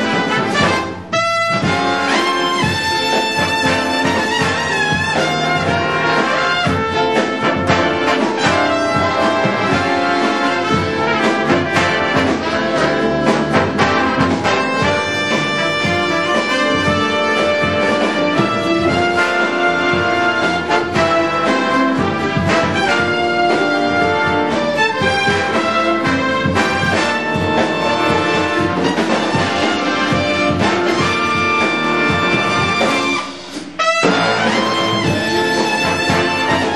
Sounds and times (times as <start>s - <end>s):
Music: 0.0s - 36.7s.